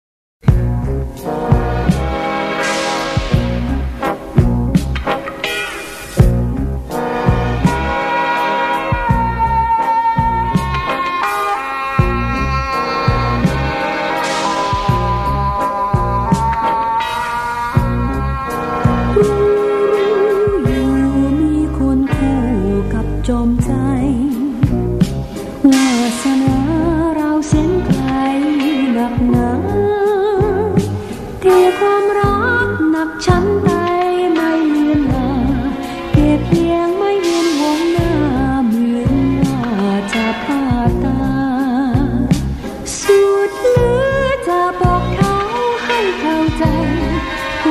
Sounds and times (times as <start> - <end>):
Folk music: 0.5 - 47.7.